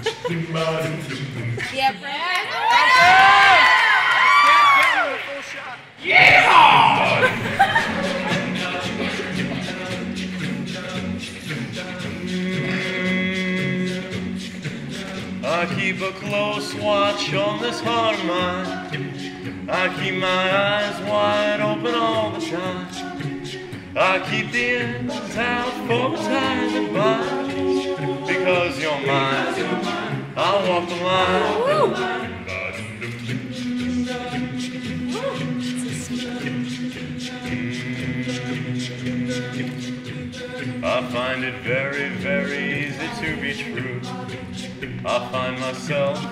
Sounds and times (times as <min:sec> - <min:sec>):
Music: 0:00.0 - 0:02.0, 0:05.8 - 0:46.3.